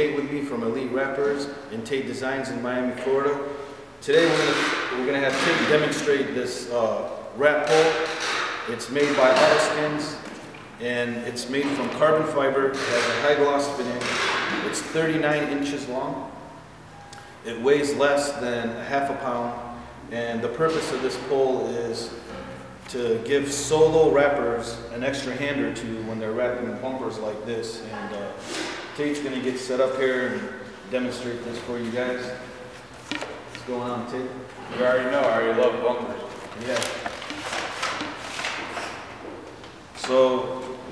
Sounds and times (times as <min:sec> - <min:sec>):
Speech: 0:00.0 - 0:08.1, 0:08.7 - 0:10.2, 0:10.8 - 0:16.3, 0:17.4 - 0:22.2, 0:22.9 - 0:28.4, 0:29.0 - 0:32.5, 0:33.6 - 0:37.0, 0:40.0 - 0:40.8.